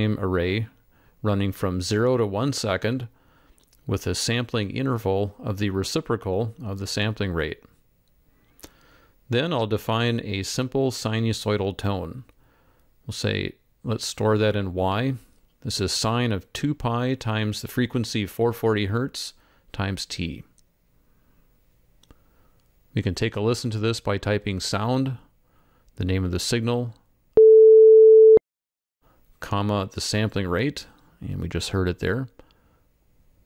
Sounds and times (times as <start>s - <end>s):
Speech: 0.0s - 3.1s, 3.9s - 7.7s, 9.3s - 12.3s, 13.1s - 20.6s, 22.9s - 25.3s, 26.0s - 27.0s, 29.4s - 32.4s.